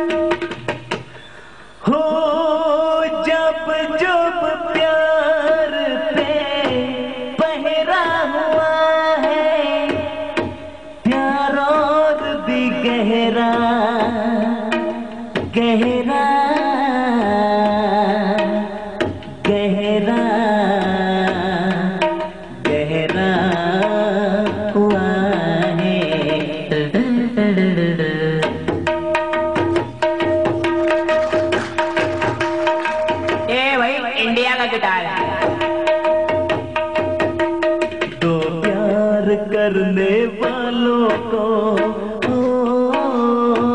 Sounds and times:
Music: 0:00.0 - 0:43.7.

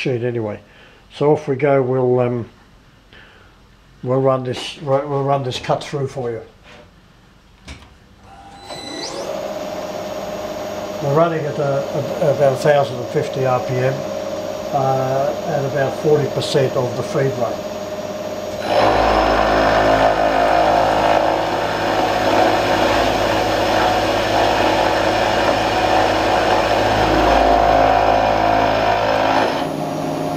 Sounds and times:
Speech: 0:00.0 - 0:02.6, 0:04.0 - 0:06.6, 0:11.0 - 0:14.0, 0:14.7 - 0:17.6.

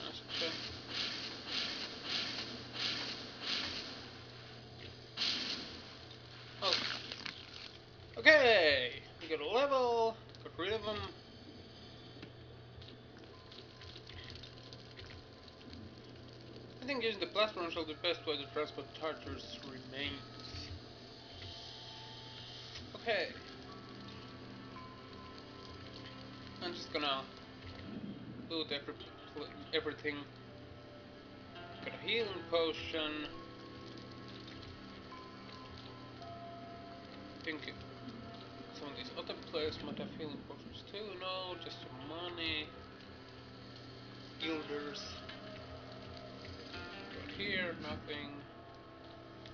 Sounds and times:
Speech: 0:00.0 - 0:00.6, 0:08.2 - 0:11.2, 0:16.8 - 0:20.3, 0:23.0 - 0:23.4, 0:26.6 - 0:27.3, 0:28.5 - 0:30.3, 0:31.8 - 0:33.4, 0:37.5 - 0:37.8, 0:38.8 - 0:42.7, 0:44.4 - 0:45.2, 0:47.3 - 0:48.5.

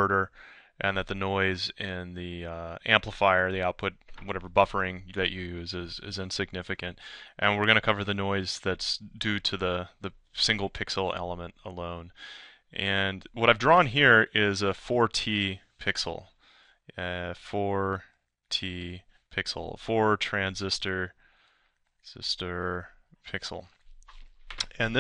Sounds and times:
Speech: 0:00.0 - 0:16.3, 0:16.9 - 0:21.1, 0:22.1 - 0:23.7, 0:24.6 - 0:25.0.

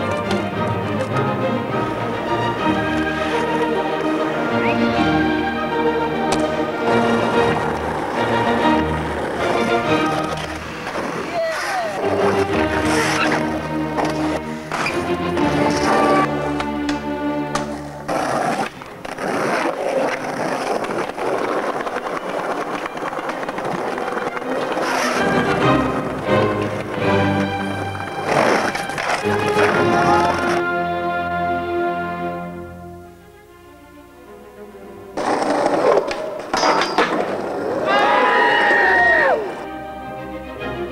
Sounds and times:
Skateboard: 0:00.0 - 0:02.1, 0:02.7 - 0:05.0, 0:06.2 - 0:30.7, 0:35.2 - 0:39.7
Music: 0:00.0 - 0:40.9.

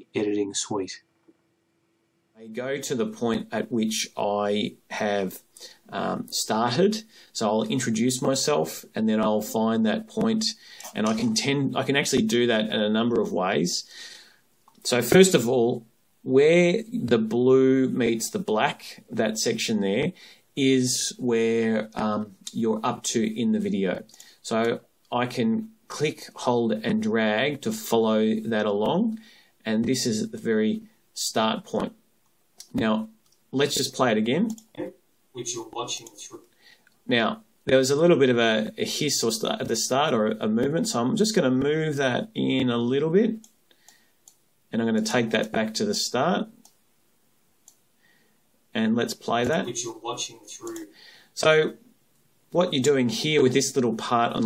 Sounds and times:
Speech: 0:00.0 - 0:01.1, 0:02.4 - 0:13.9, 0:14.8 - 0:32.0, 0:32.6 - 0:36.5, 0:37.1 - 0:43.4, 0:44.7 - 0:46.6, 0:48.7 - 0:51.9, 0:52.5 - 0:54.4.

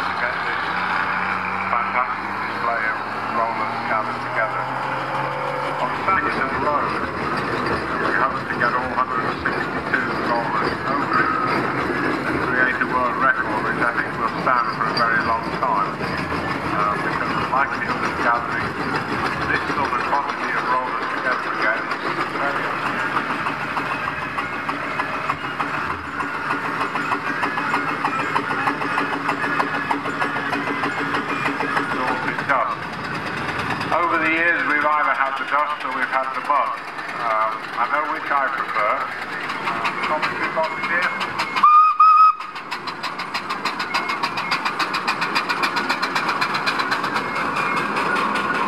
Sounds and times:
Speech: 0:00.0 - 0:00.6, 0:01.7 - 0:04.8, 0:05.8 - 0:07.1, 0:07.9 - 0:11.4, 0:12.4 - 0:18.8, 0:19.4 - 0:22.9, 0:31.6 - 0:32.8, 0:33.9 - 0:39.2, 0:40.0 - 0:41.2.

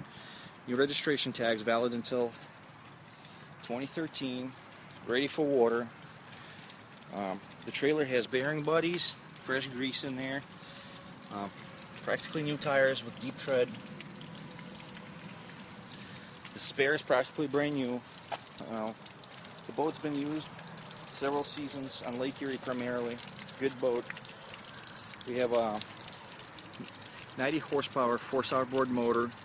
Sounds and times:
Speech: 0:00.7 - 0:02.4, 0:03.6 - 0:05.9, 0:07.1 - 0:10.4, 0:11.3 - 0:13.7, 0:16.6 - 0:18.0, 0:18.6 - 0:19.0, 0:19.7 - 0:20.5, 0:21.1 - 0:24.1, 0:25.3 - 0:25.8, 0:27.4 - 0:29.4.

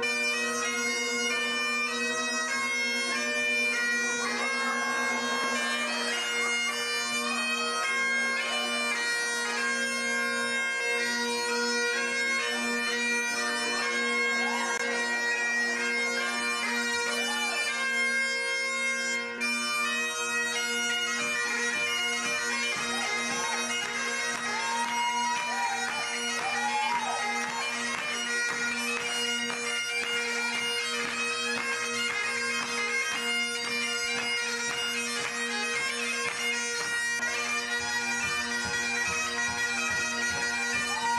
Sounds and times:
Bagpipes: 0:00.0 - 0:41.1
Wind instrument, woodwind instrument: 0:00.0 - 0:41.1.

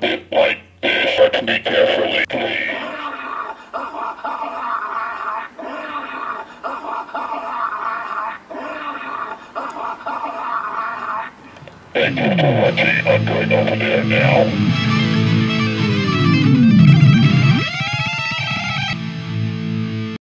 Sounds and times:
Speech: 0:00.0 - 0:02.9, 0:12.0 - 0:14.6
Music: 0:12.7 - 0:20.2.

